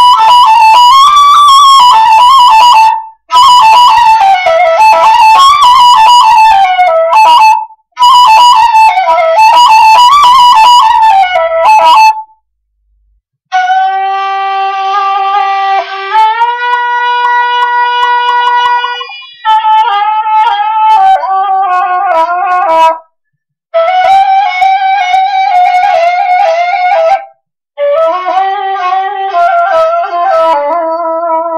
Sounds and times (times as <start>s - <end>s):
Flute: 0.0s - 12.5s, 13.5s - 31.5s.